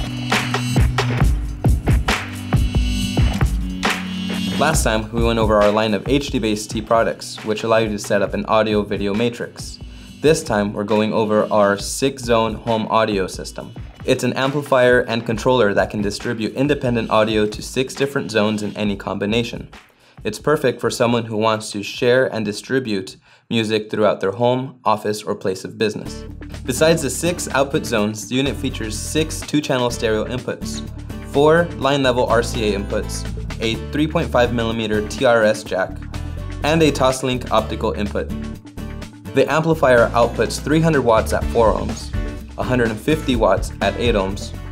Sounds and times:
Music: 0.0s - 44.7s
Speech: 4.6s - 36.0s, 36.6s - 38.4s, 39.3s - 44.6s.

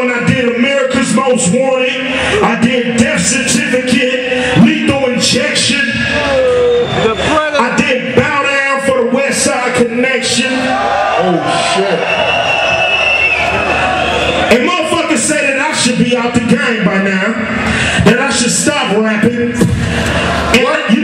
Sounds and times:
Speech: 0.0s - 12.1s, 14.5s - 19.7s, 20.5s - 21.0s.

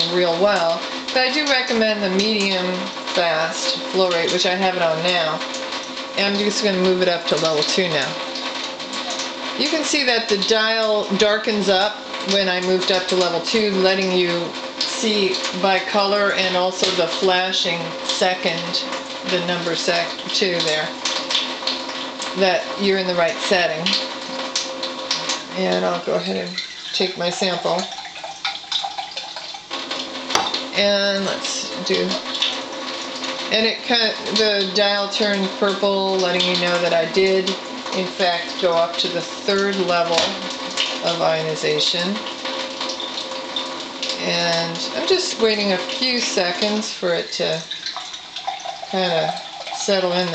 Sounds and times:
Speech: 0.0s - 5.4s, 6.2s - 8.2s, 9.6s - 21.0s, 22.4s - 24.0s, 25.5s - 27.9s, 30.8s - 32.3s, 33.5s - 42.2s, 44.2s - 47.7s, 48.9s - 50.3s.

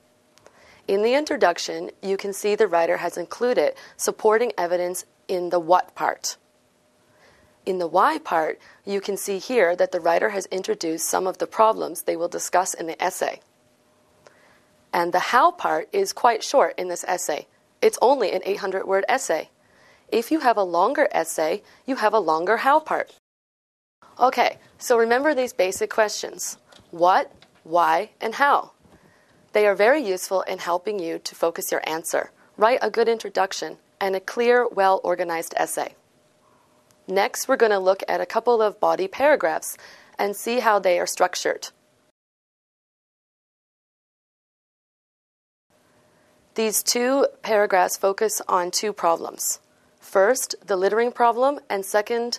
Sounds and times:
Speech: 0.9s - 6.4s, 7.7s - 13.4s, 15.0s - 19.5s, 20.1s - 23.2s, 24.2s - 28.7s, 29.6s - 36.0s, 37.1s - 41.8s, 46.6s - 52.3s.

